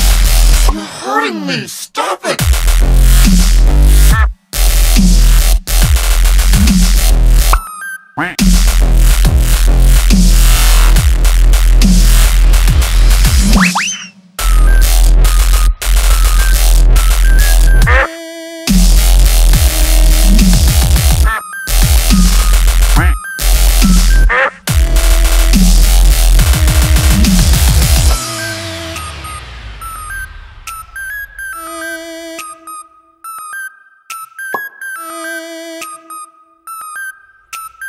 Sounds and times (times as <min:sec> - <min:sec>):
Dubstep: 0:00.0 - 0:01.7, 0:02.3 - 0:18.1, 0:18.7 - 0:32.1.